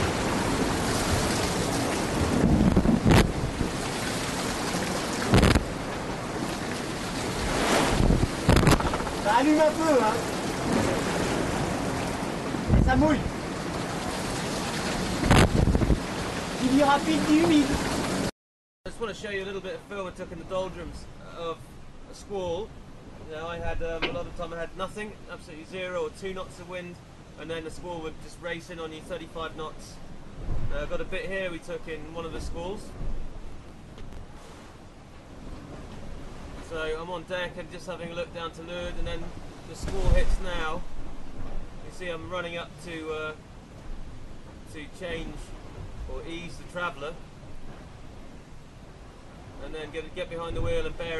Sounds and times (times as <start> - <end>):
Speech: 9.2 - 10.2, 12.8 - 13.3, 16.6 - 17.8, 18.9 - 22.7, 23.3 - 30.0, 30.7 - 32.9, 36.6 - 40.8, 41.8 - 43.4, 44.7 - 45.5, 46.1 - 47.2, 49.6 - 51.1.